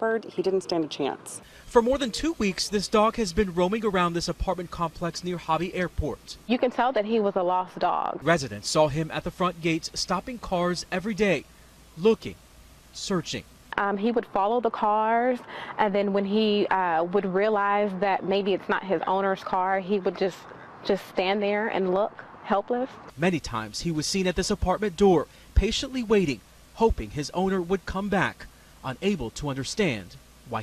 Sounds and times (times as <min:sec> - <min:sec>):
Speech: 0:00.0 - 0:11.4, 0:12.0 - 0:12.4, 0:13.0 - 0:30.6.